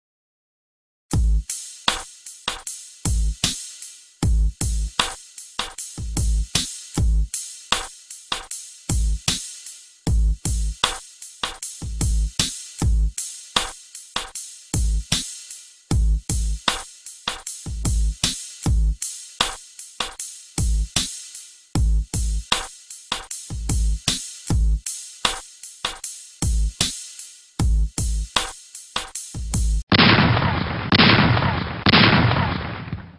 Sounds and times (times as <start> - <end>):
Music: 1.1 - 29.9
Burst, pop: 29.9 - 33.1.